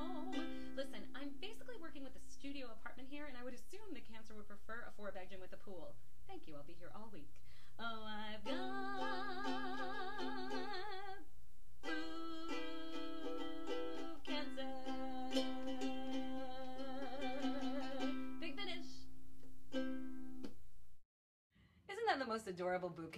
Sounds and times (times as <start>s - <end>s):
Ukulele: 0.0s - 1.7s, 8.4s - 11.2s, 11.8s - 20.6s
Speech: 0.8s - 8.4s, 18.4s - 19.0s, 21.9s - 23.1s.